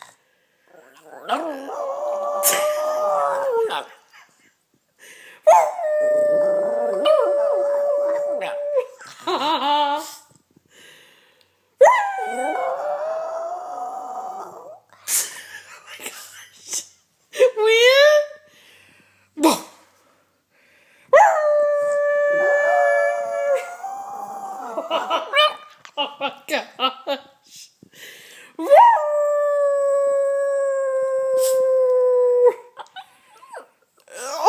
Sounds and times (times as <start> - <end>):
Howl: 0.8 - 3.9, 5.5 - 9.0, 11.8 - 14.9, 21.2 - 25.5, 28.6 - 32.7
Speech: 15.7 - 18.4, 26.2 - 27.3.